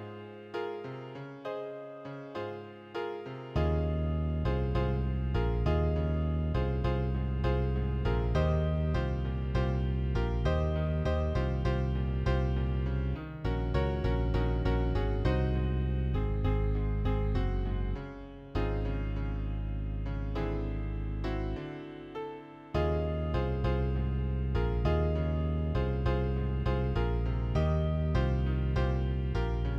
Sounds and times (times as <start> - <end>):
Happy music: 0.0 - 29.7.